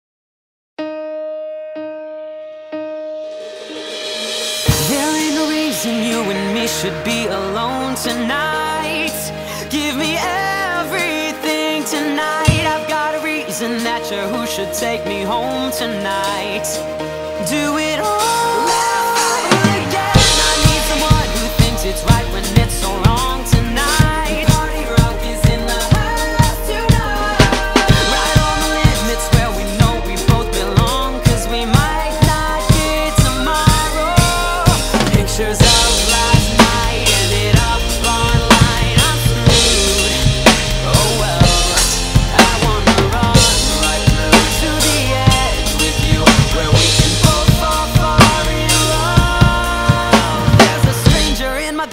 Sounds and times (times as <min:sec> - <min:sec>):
Drum kit: 0:03.1 - 0:51.9
Drum: 0:03.4 - 0:09.2, 0:12.4 - 0:13.2, 0:17.5 - 0:51.9.